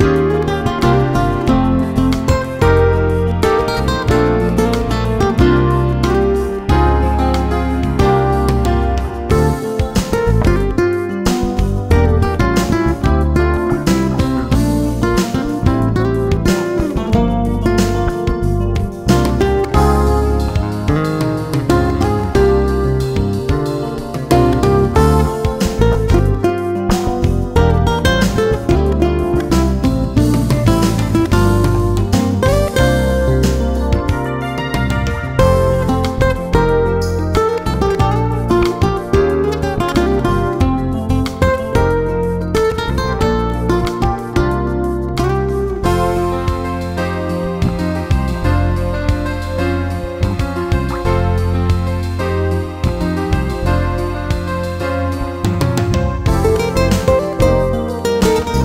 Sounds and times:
Music: 0.0 - 58.6.

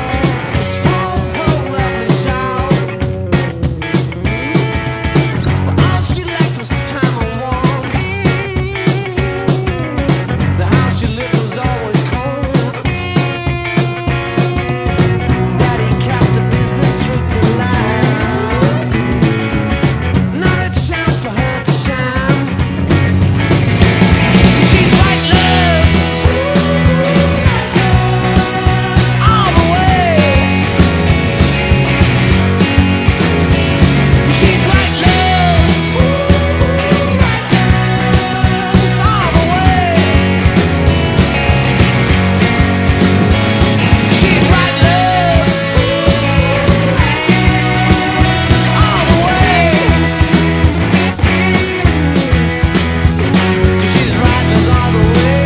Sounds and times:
Music: 0.0 - 55.4.

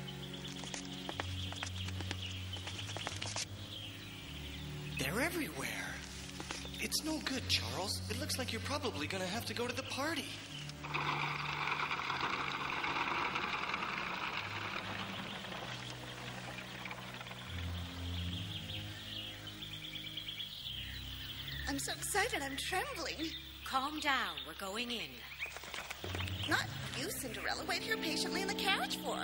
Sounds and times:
Bird vocalization, bird call, bird song: 0.0 - 10.8, 14.4 - 29.2
Environmental noise: 0.0 - 29.2.

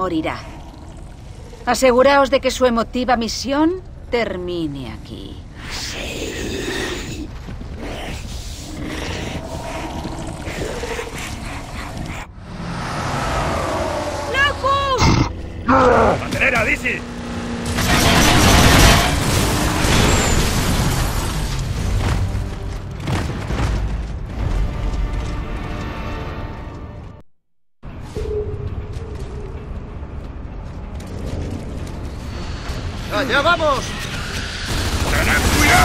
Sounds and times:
Car: 12.4 - 21.6.

